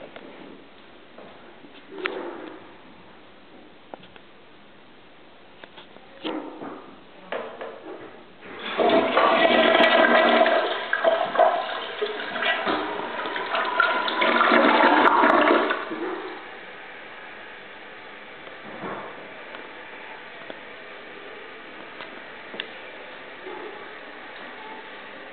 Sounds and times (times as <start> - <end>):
Inside, small room: 0.0 - 25.3
Toilet flush: 8.4 - 16.6.